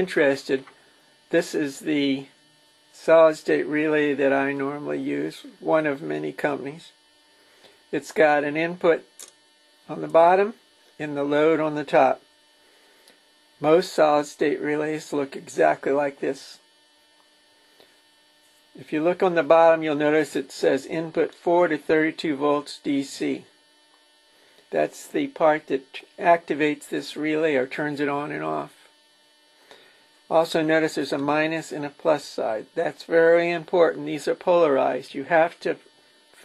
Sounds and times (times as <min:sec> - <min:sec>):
Speech: 0:00.0 - 0:00.7, 0:01.3 - 0:02.4, 0:03.0 - 0:07.0, 0:07.9 - 0:09.3, 0:09.9 - 0:12.2, 0:13.6 - 0:16.7, 0:18.8 - 0:23.6, 0:24.7 - 0:28.9, 0:30.3 - 0:36.4.